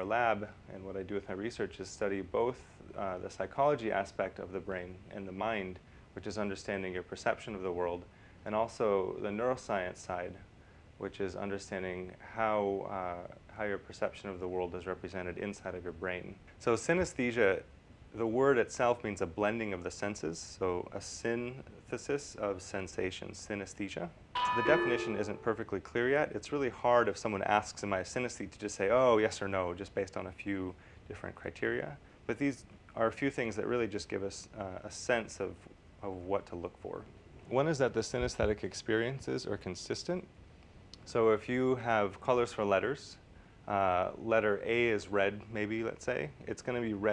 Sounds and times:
Speech: 0.0s - 40.3s, 41.0s - 47.1s.

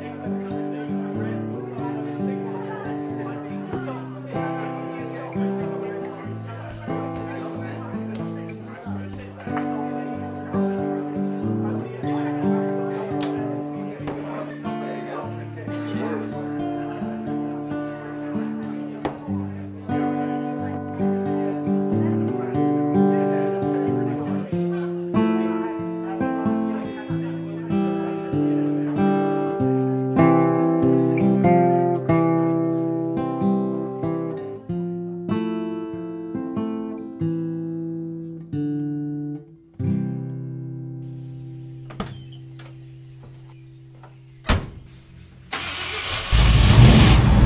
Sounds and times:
Speech: 0.0s - 38.6s
Music: 0.0s - 47.4s.

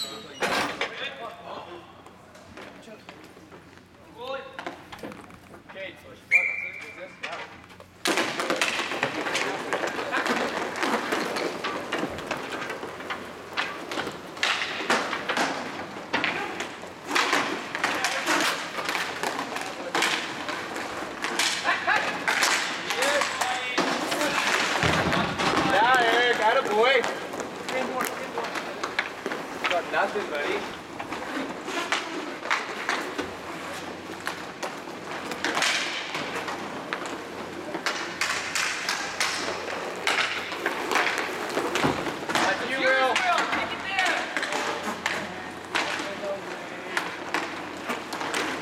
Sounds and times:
Speech: 25.1s - 28.6s.

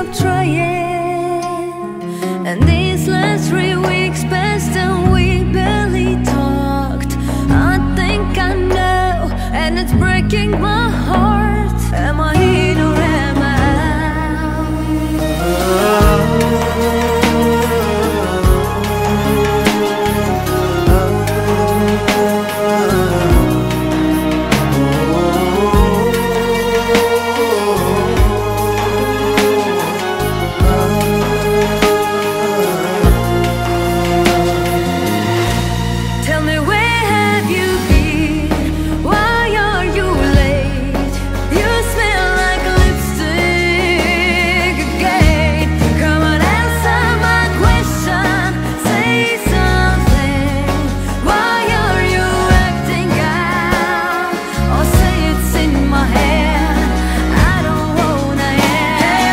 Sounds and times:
New-age music: 0.0s - 59.3s.

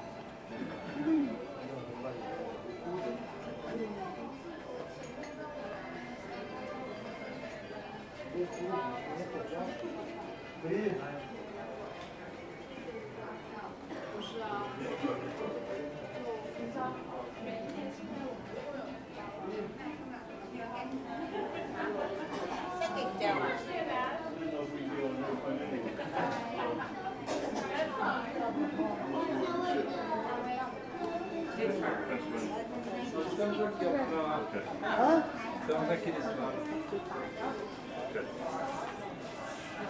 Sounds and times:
Music: 0.0s - 39.9s.

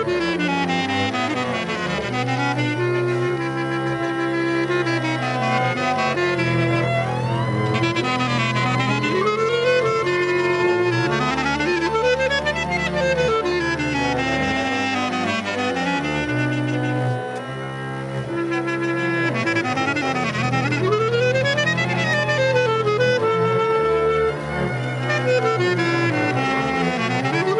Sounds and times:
Music: 0.0s - 27.5s.

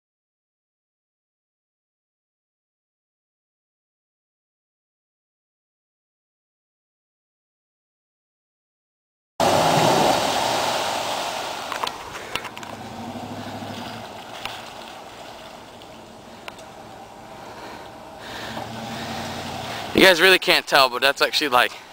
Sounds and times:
Vehicle: 9.4s - 20.3s
Speech: 19.9s - 21.9s.

